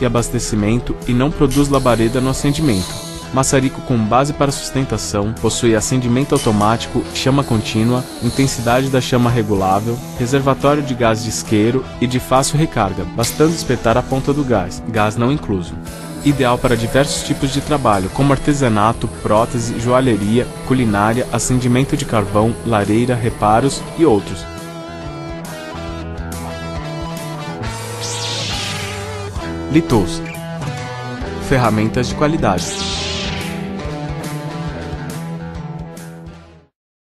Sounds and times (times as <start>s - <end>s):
Speech: 0.0s - 24.6s, 29.7s - 30.3s, 31.4s - 32.9s
Music: 0.0s - 36.8s.